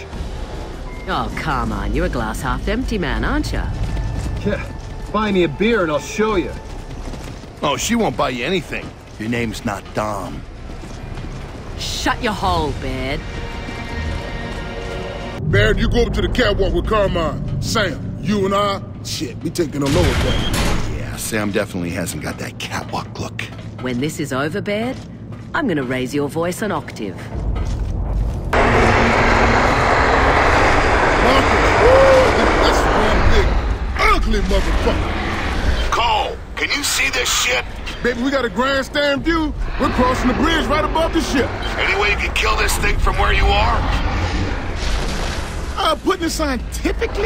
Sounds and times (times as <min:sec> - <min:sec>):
Music: 0:00.0 - 0:28.6.